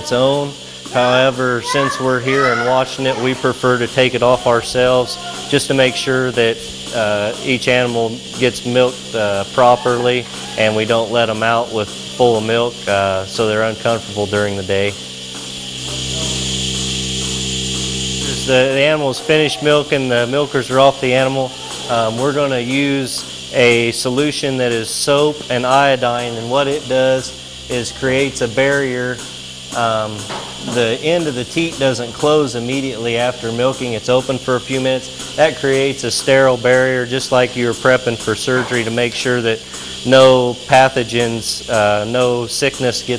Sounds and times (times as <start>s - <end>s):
Speech: 0.0s - 15.0s, 18.2s - 29.2s, 29.8s - 43.1s.